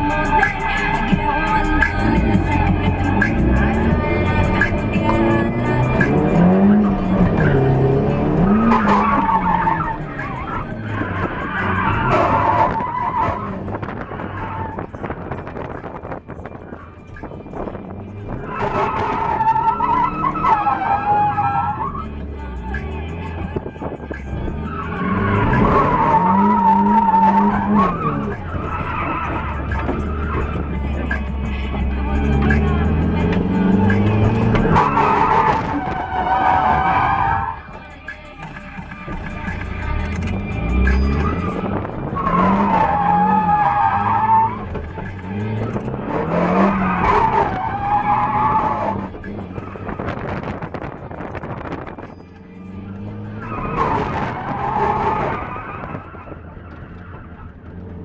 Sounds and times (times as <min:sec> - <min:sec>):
Tire squeal: 0:00.0 - 0:16.1, 0:18.3 - 0:22.3, 0:22.9 - 0:31.4, 0:32.1 - 0:37.8, 0:39.6 - 0:58.0
Race car, auto racing: 0:00.0 - 0:58.0
Skidding: 0:00.0 - 0:58.0.